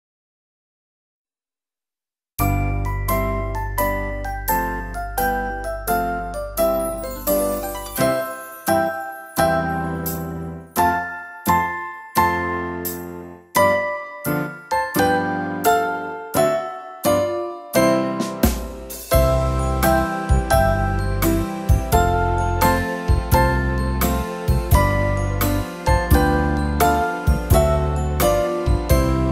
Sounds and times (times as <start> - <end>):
Electric piano: 2.4 - 29.3.